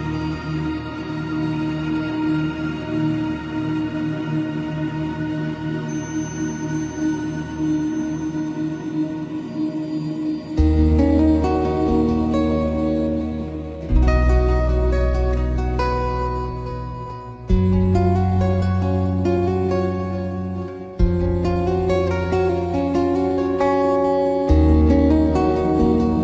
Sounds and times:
Music: 0.0 - 26.2.

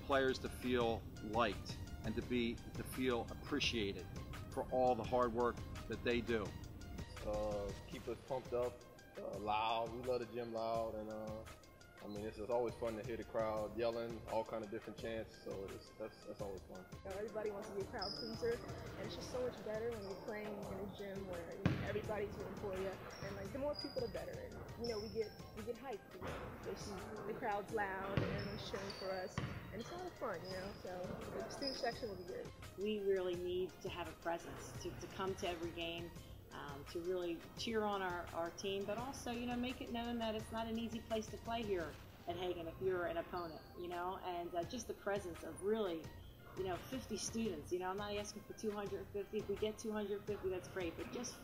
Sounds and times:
Male speech, man speaking: 0.0 - 6.6, 7.2 - 16.8
Music: 0.0 - 51.4
Basketball bounce: 21.6 - 22.3, 28.1 - 29.8.

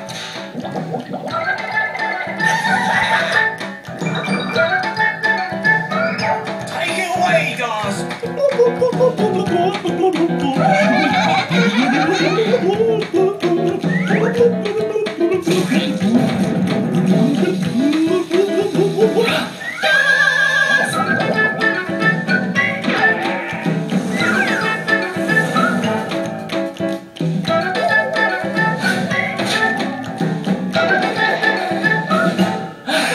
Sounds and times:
Music: 0.0 - 33.1.

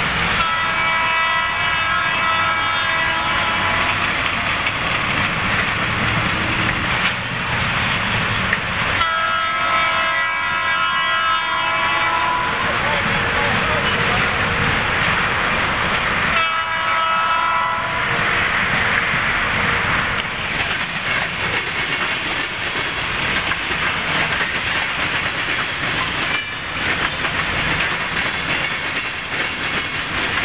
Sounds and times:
Railroad car, train wagon: 0.0 - 30.4
Train: 0.0 - 30.4.

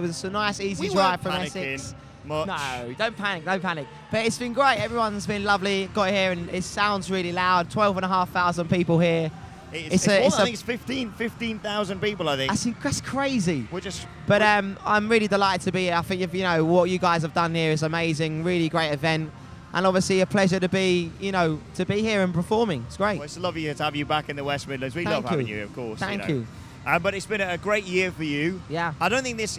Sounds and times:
Speech: 0.0 - 3.8, 9.8 - 12.7, 23.2 - 29.5.

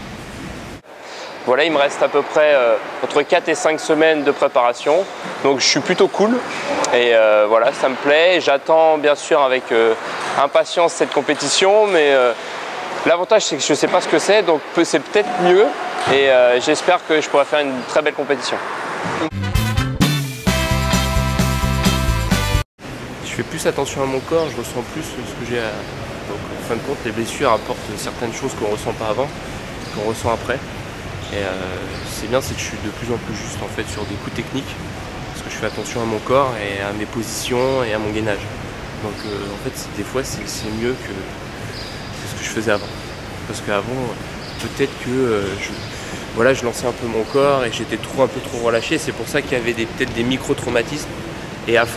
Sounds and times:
Speech: 1.4 - 12.4, 13.0 - 18.6, 23.2 - 29.3, 29.9 - 30.6, 31.2 - 34.8, 35.4 - 41.4, 42.2 - 42.9, 43.5 - 51.1, 51.7 - 51.9.

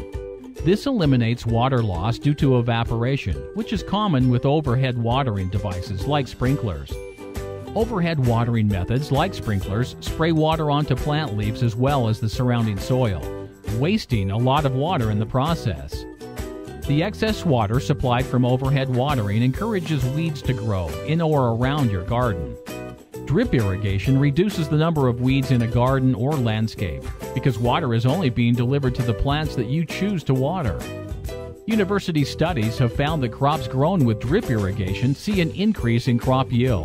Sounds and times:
Music: 0.0 - 36.8
Speech: 0.6 - 7.0, 7.7 - 16.0, 16.8 - 22.6, 23.2 - 30.9, 31.7 - 36.8.

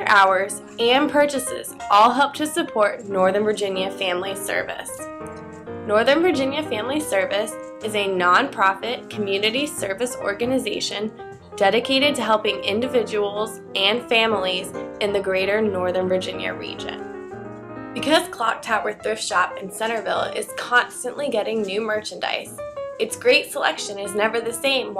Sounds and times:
Speech: 0.0 - 5.0, 5.9 - 17.0, 18.0 - 24.9
Music: 0.0 - 24.9.

